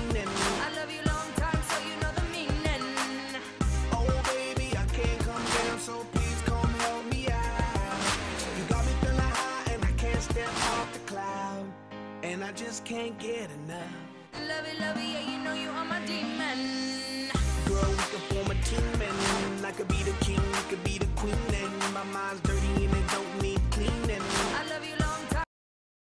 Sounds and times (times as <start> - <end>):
Music: 0.0 - 25.5.